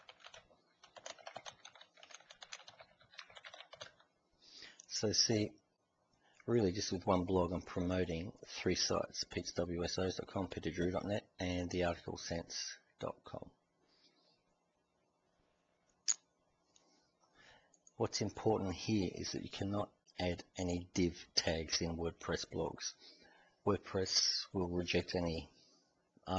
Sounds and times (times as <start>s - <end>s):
Computer keyboard: 0.0s - 4.1s.